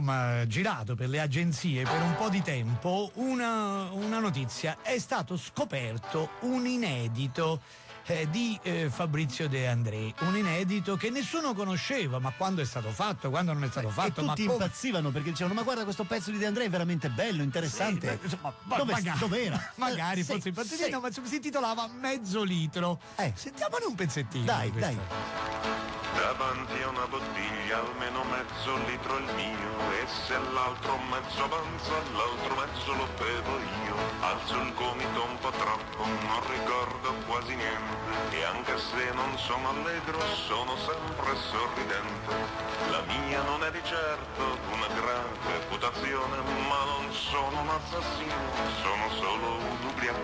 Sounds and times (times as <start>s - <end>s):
Radio: 0.0s - 21.6s, 26.1s - 50.2s
Speech: 0.0s - 25.1s
Music: 0.0s - 50.2s.